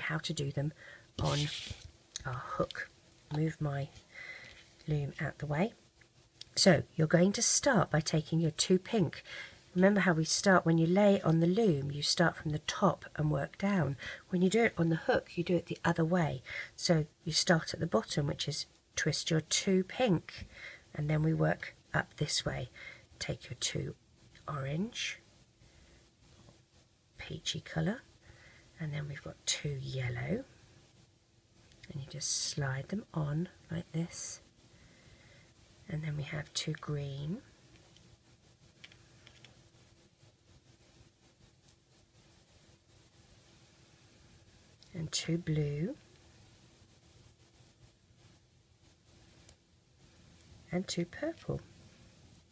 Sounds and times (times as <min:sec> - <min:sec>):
Speech: 0:00.0 - 0:04.0, 0:04.8 - 0:05.8, 0:06.4 - 0:25.2, 0:27.2 - 0:28.1, 0:28.8 - 0:30.5, 0:31.9 - 0:34.4, 0:35.8 - 0:37.5, 0:44.9 - 0:46.0, 0:50.7 - 0:51.7
Inside, small room: 0:00.0 - 0:52.5.